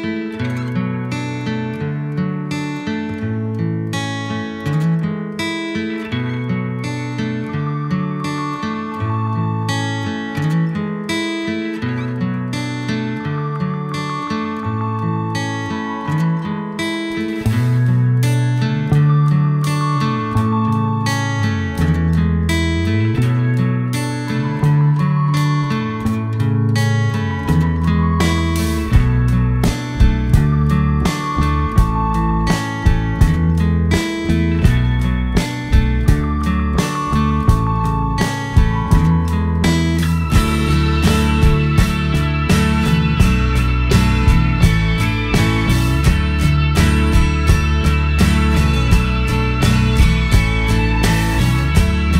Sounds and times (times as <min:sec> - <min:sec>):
Music: 0:00.0 - 0:52.1.